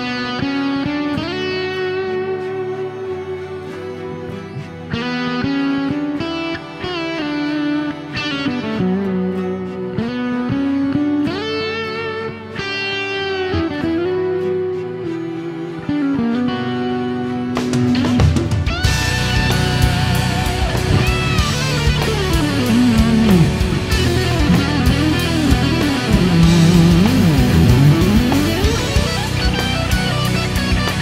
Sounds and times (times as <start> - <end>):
Music: 0.0 - 31.0.